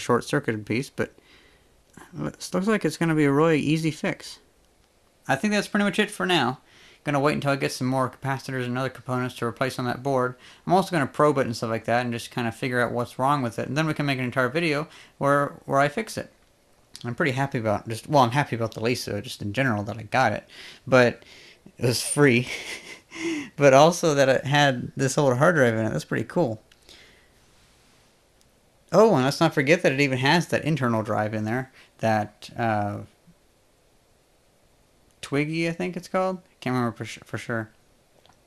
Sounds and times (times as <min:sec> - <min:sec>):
Speech: 0:00.0 - 0:01.2, 0:02.0 - 0:04.4, 0:05.3 - 0:16.4, 0:17.0 - 0:26.6, 0:28.9 - 0:33.2, 0:35.2 - 0:37.8
Inside, small room: 0:00.0 - 0:38.4.